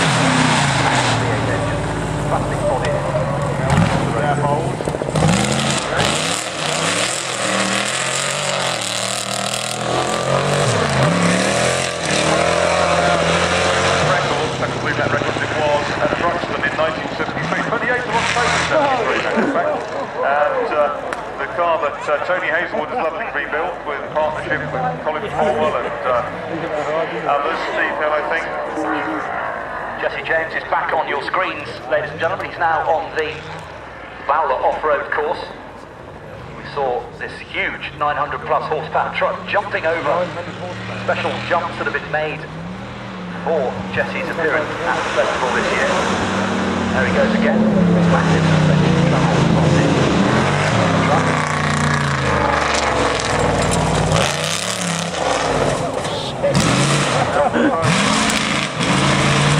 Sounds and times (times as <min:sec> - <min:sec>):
Truck: 0:00.0 - 0:59.5
Speech: 0:00.8 - 0:04.9, 0:12.6 - 0:29.4, 0:30.0 - 0:33.6, 0:34.2 - 0:35.7, 0:36.4 - 0:42.5, 0:43.4 - 0:46.2, 0:46.9 - 0:51.3, 0:55.6 - 0:58.0.